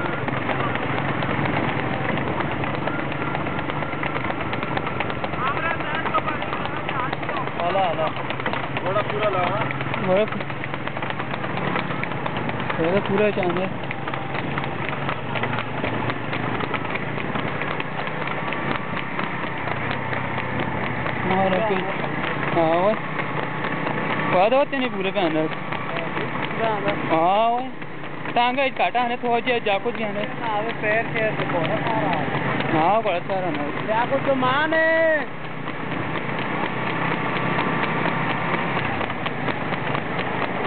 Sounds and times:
Clip-clop: 0.0 - 40.6.

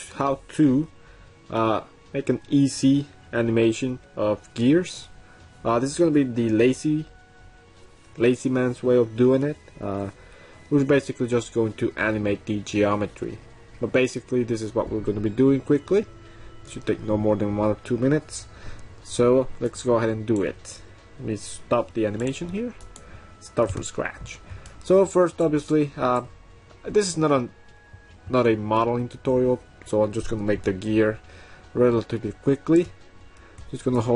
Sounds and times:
Speech: 0.0 - 0.9, 1.5 - 7.1, 8.2 - 16.1, 16.7 - 18.4, 19.1 - 22.8, 23.4 - 27.5, 28.3 - 31.2, 31.8 - 32.9, 33.7 - 34.1
Music: 0.0 - 34.1.

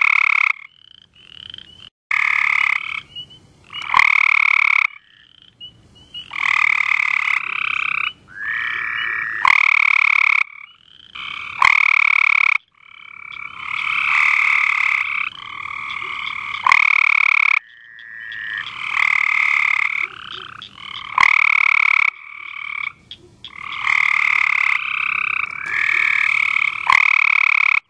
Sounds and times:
Croak: 0.0 - 27.9.

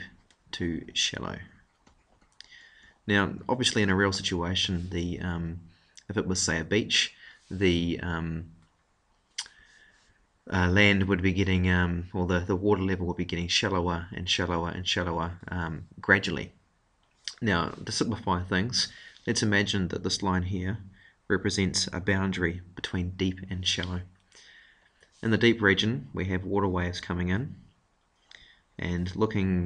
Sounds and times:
Speech: 0.0 - 1.6, 2.5 - 8.6, 10.5 - 16.6, 17.3 - 24.1, 25.2 - 27.7, 28.8 - 29.6.

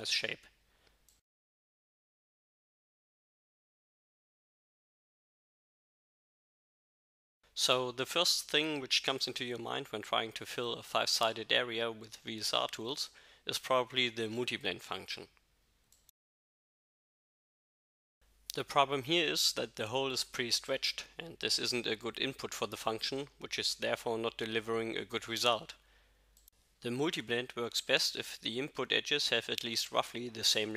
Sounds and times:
Speech: 0.0 - 0.5, 7.6 - 15.4, 18.5 - 25.8, 26.8 - 30.7.

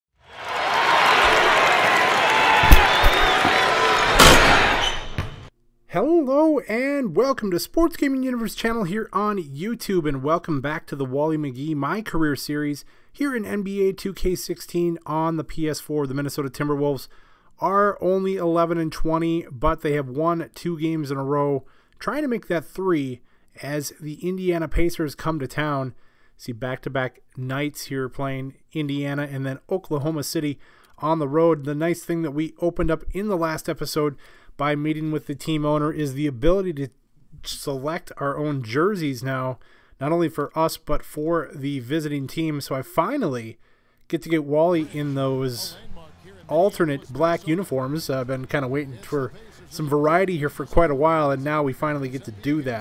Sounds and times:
Basketball bounce: 4.2 - 5.5
Speech: 5.9 - 52.8.

